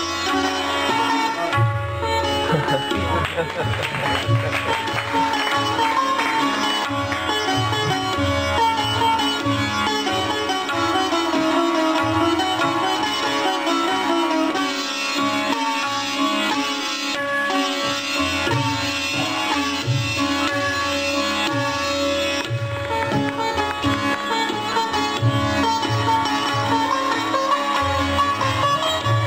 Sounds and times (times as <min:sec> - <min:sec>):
Sitar: 0:00.0 - 0:29.2.